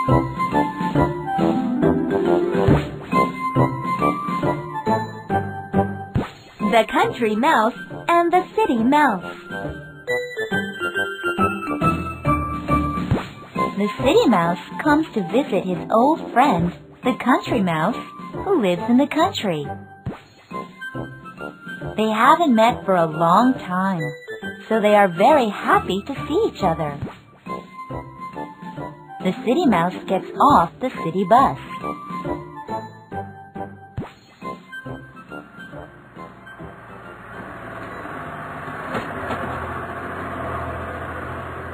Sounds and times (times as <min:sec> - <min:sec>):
Music: 0:00.0 - 0:38.4
Speech: 0:06.6 - 0:09.3, 0:13.8 - 0:19.7, 0:22.0 - 0:27.0, 0:29.2 - 0:31.6.